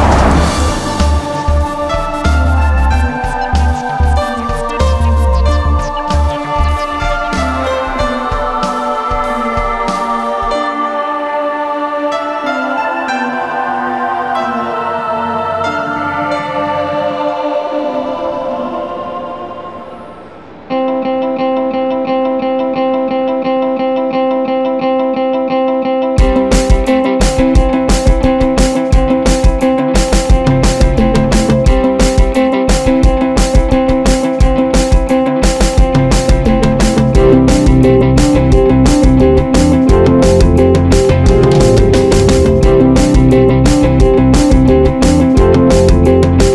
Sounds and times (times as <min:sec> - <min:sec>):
Music: 0:00.0 - 0:46.5.